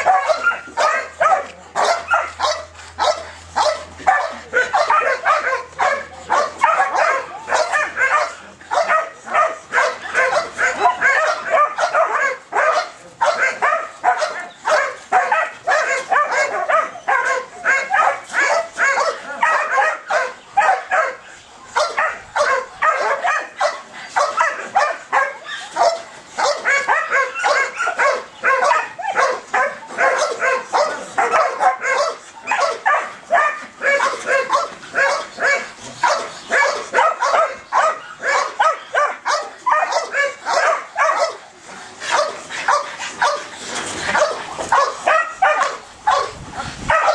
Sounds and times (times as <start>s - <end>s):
Bow-wow: 0.0s - 21.2s, 21.8s - 41.4s, 42.1s - 43.5s, 44.1s - 47.1s.